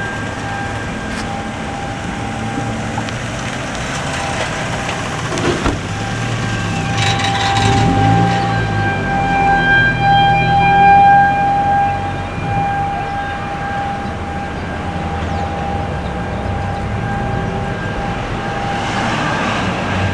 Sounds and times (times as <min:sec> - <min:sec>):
Bus: 0:00.0 - 0:20.1
Siren: 0:00.0 - 0:20.1.